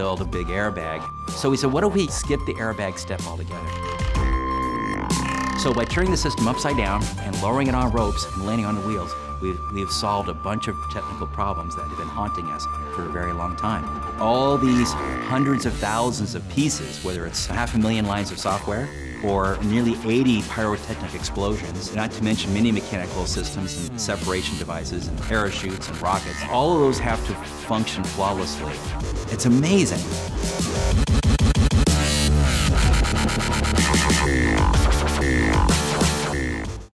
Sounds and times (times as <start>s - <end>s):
Speech: 0.0s - 3.7s, 5.6s - 30.1s
Dubstep: 14.3s - 36.9s.